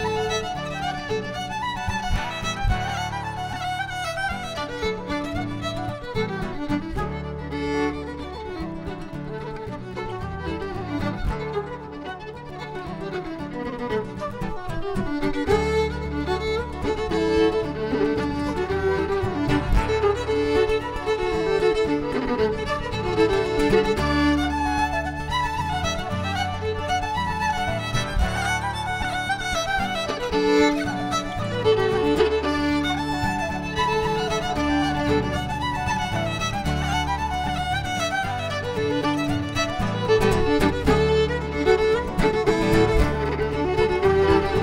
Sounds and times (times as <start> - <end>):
Violin, fiddle: 0.0 - 44.6.